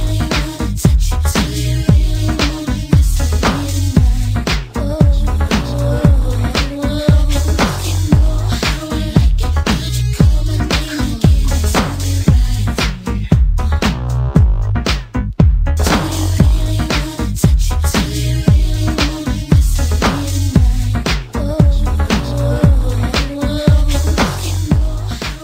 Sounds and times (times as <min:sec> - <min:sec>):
Music: 0:00.0 - 0:25.4.